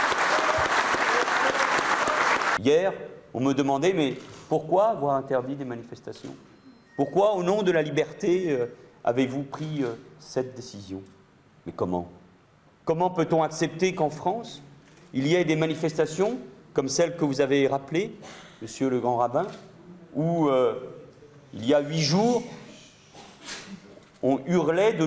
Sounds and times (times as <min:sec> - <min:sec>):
Speech: 0:02.6 - 0:06.4, 0:07.0 - 0:12.2, 0:12.9 - 0:23.0, 0:24.2 - 0:25.0.